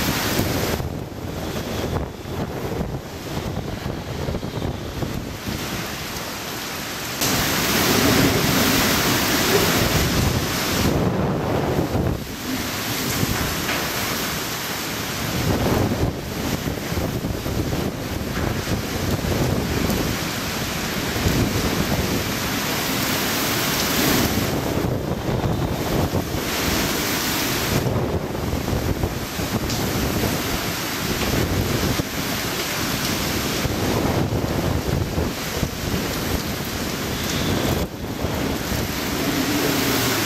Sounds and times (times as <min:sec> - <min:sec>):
Outside, rural or natural: 0:00.0 - 0:40.2
Wind: 0:00.0 - 0:40.2.